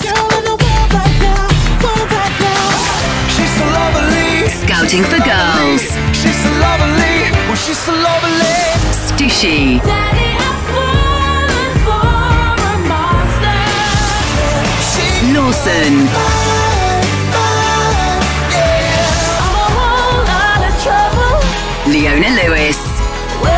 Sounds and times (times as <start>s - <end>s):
Music: 0.0s - 23.5s
Speech: 4.5s - 6.0s, 8.9s - 9.9s, 15.2s - 16.2s, 21.9s - 23.0s.